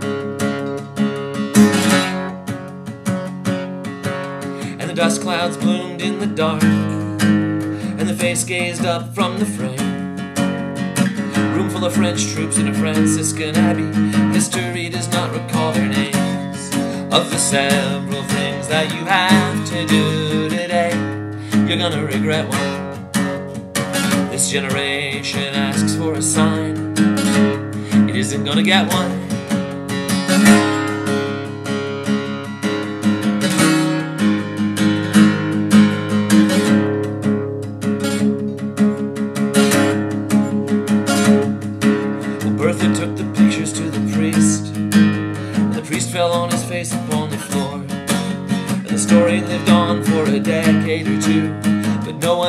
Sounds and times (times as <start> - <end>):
Acoustic guitar: 0.0 - 52.4
Strum: 0.0 - 52.4.